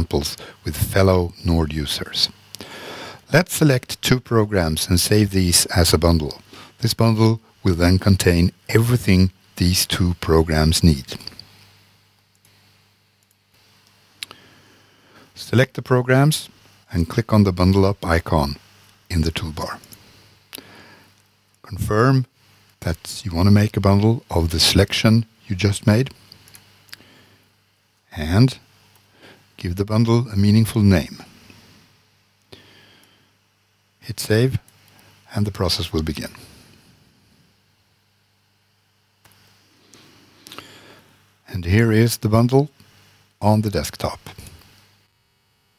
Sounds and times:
Speech: 0:00.0 - 0:02.4, 0:03.3 - 0:11.4, 0:15.4 - 0:19.9, 0:21.6 - 0:26.2, 0:28.1 - 0:28.7, 0:29.6 - 0:31.3, 0:34.0 - 0:34.7, 0:35.3 - 0:36.5, 0:41.5 - 0:42.8, 0:43.4 - 0:44.6.

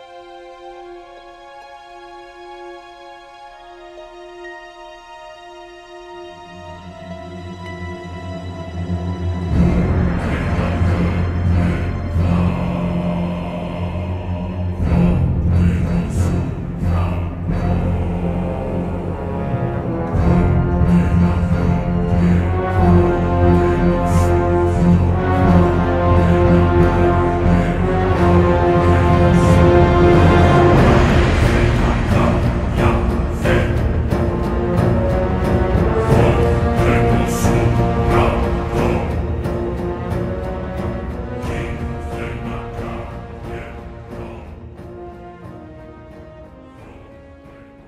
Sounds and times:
Background music: 0:00.0 - 0:47.8
Theme music: 0:00.0 - 0:47.8.

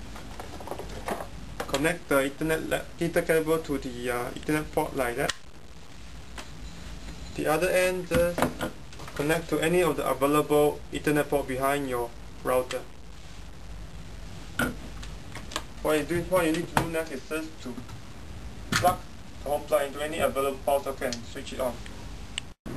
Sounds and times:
Speech: 0:01.7 - 0:05.3, 0:07.4 - 0:08.4, 0:09.2 - 0:12.9, 0:15.8 - 0:17.9, 0:18.8 - 0:21.8.

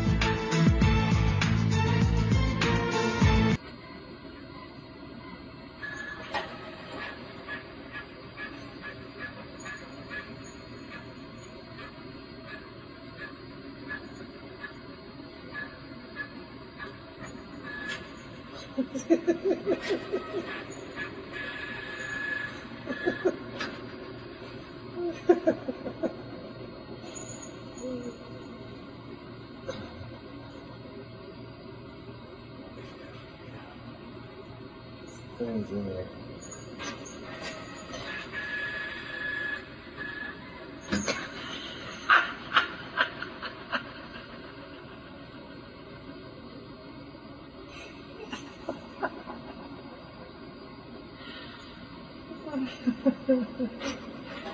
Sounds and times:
Printer: 0:03.6 - 0:49.1
Speech: 0:35.4 - 0:36.2.

